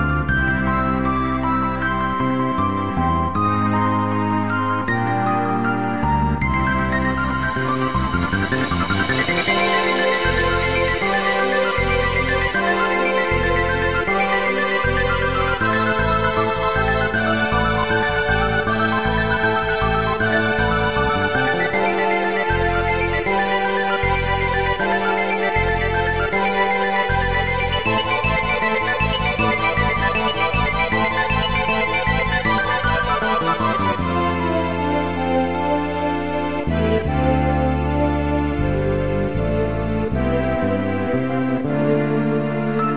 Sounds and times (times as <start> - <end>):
Video game music: 0.0 - 42.9.